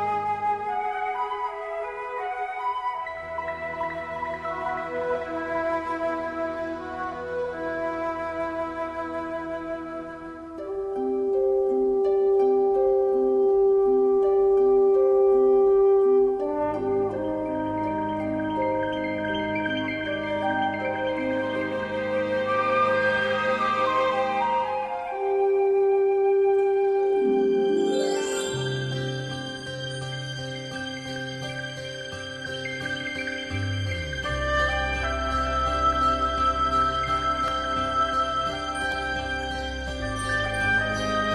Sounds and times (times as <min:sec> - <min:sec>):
Glockenspiel: 0:16.2 - 0:25.6, 0:26.8 - 0:41.3.